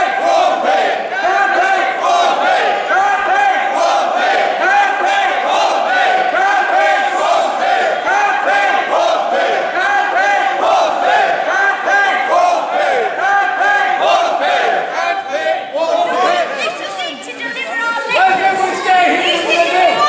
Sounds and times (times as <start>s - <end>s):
Inside, large room or hall: 0.0s - 20.0s.